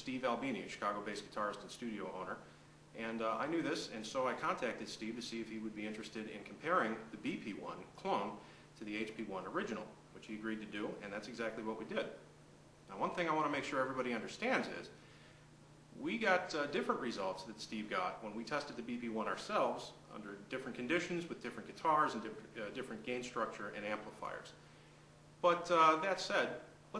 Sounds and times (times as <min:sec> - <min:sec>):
Speech: 0:00.0 - 0:02.4, 0:03.0 - 0:12.2, 0:12.9 - 0:15.0, 0:16.0 - 0:24.6, 0:25.4 - 0:26.9.